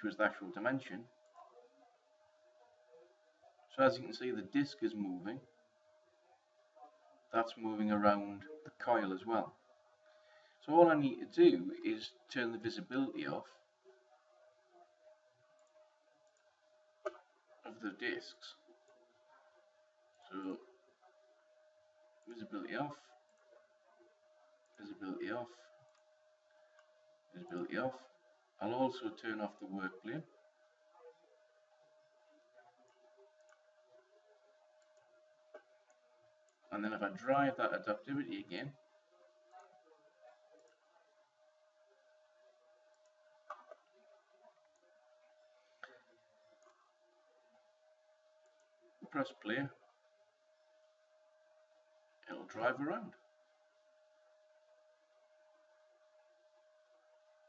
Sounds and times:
Speech: 0.0s - 5.6s, 6.2s - 9.6s, 10.6s - 15.3s, 17.0s - 19.6s, 20.2s - 21.3s, 22.2s - 25.8s, 27.3s - 34.6s, 36.6s - 42.1s, 48.8s - 50.0s, 52.2s - 53.2s.

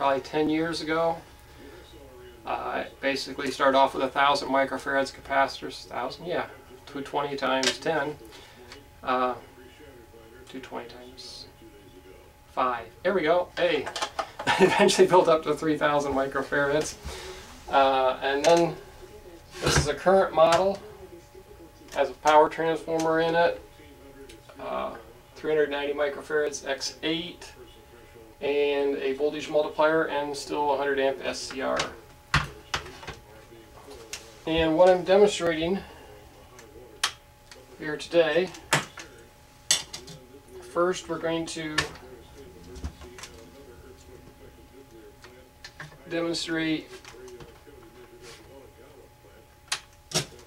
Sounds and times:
Speech: 0.0s - 50.4s.

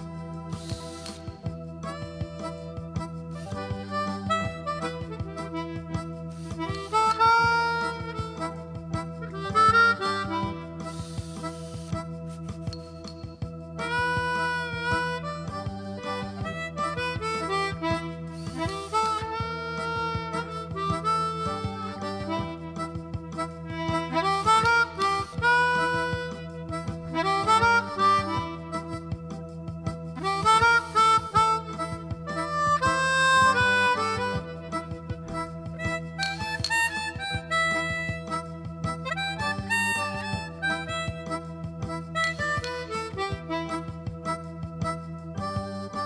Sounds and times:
Music: 0.0s - 46.0s.

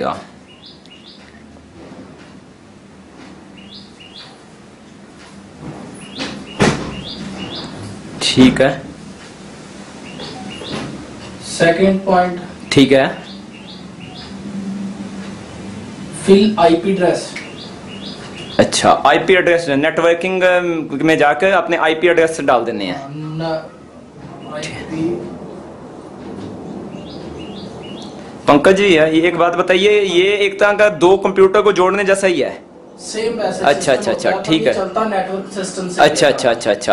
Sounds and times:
Speech: 0.0s - 0.3s, 8.2s - 8.9s, 11.4s - 13.3s, 16.2s - 17.4s, 18.6s - 25.3s, 28.5s - 36.9s.

